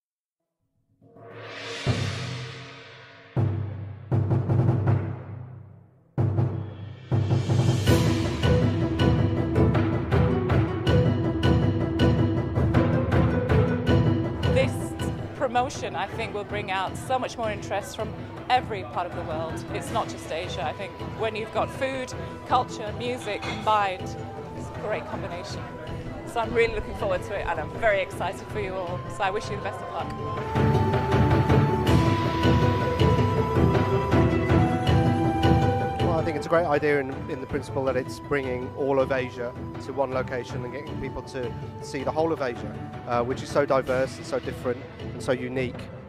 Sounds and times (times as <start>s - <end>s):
Theme music: 1.2s - 5.5s, 6.2s - 45.8s
Speech: 14.6s - 24.0s, 36.1s - 45.8s.